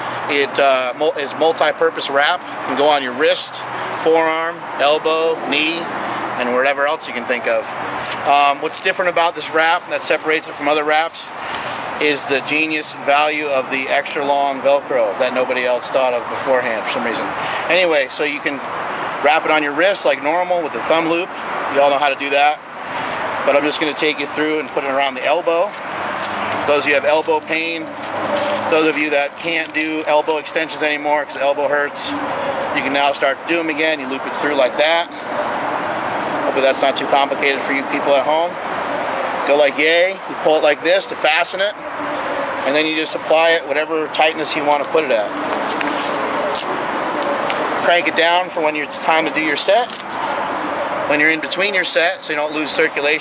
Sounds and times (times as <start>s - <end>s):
Speech: 0.3s - 11.3s, 12.0s - 18.6s, 19.2s - 22.6s, 23.4s - 25.8s, 26.6s - 27.9s, 28.7s - 32.2s, 32.8s - 35.2s, 36.5s - 38.6s, 39.4s - 41.8s, 42.6s - 45.3s, 47.8s - 50.0s, 51.1s - 53.2s.